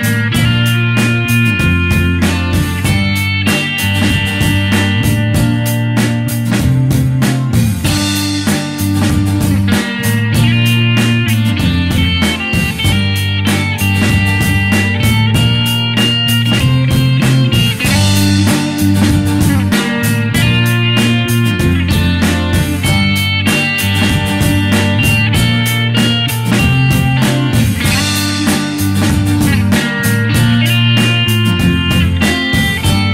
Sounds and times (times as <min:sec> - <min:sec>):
Music: 0:00.0 - 0:33.1.